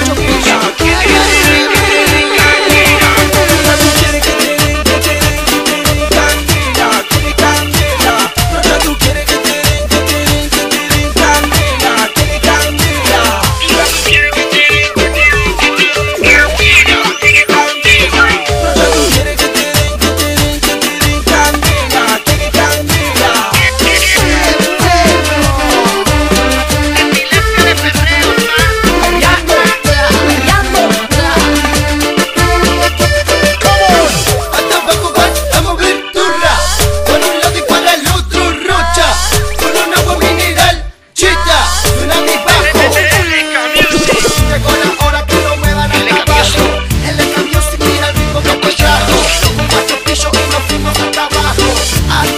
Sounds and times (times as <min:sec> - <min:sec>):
Funny music: 0:00.0 - 0:52.3.